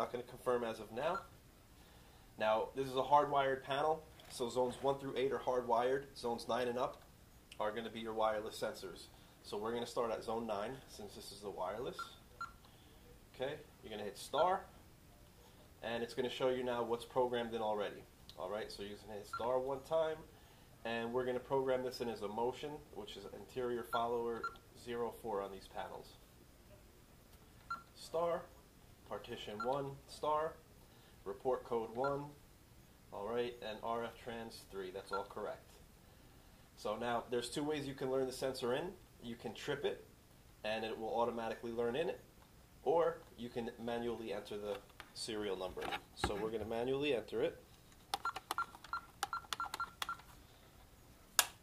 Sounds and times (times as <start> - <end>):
Speech: 0.0 - 1.3, 2.4 - 7.0, 7.6 - 12.2, 13.3 - 14.7, 15.8 - 26.2, 28.0 - 28.5, 29.1 - 30.6, 31.3 - 32.4, 33.1 - 35.8, 36.8 - 47.6
Inside, small room: 0.0 - 51.6.